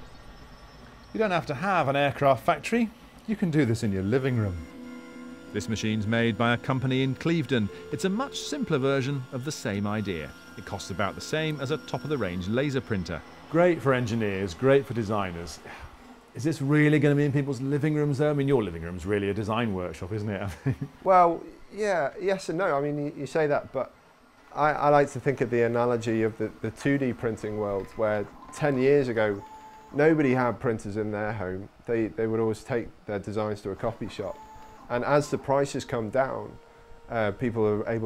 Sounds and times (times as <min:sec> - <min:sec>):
Speech: 0:01.2 - 0:04.7, 0:05.6 - 0:15.6, 0:16.4 - 0:23.9, 0:24.5 - 0:38.0.